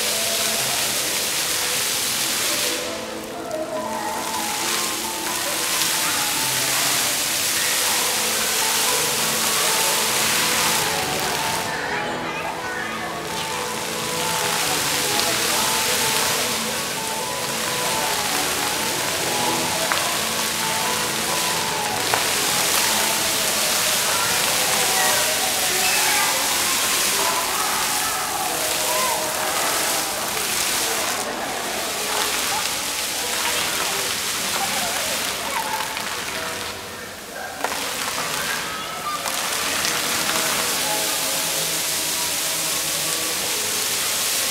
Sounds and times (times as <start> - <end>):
Music: 0.0 - 44.5
Speech: 0.0 - 44.5.